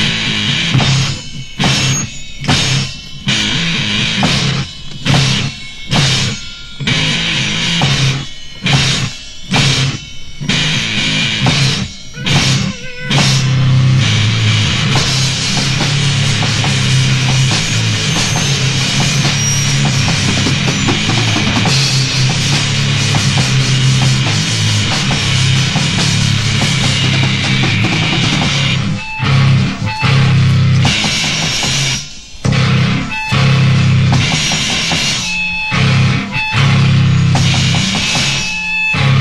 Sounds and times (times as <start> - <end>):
Music: 0.0 - 39.2.